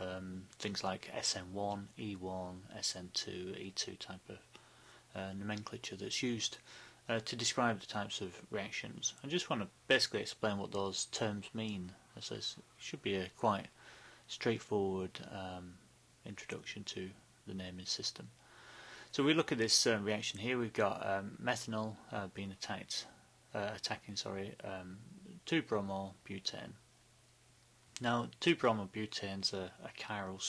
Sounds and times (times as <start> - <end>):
Speech: 0.0 - 4.5, 5.1 - 18.3, 19.1 - 26.8, 28.0 - 30.4.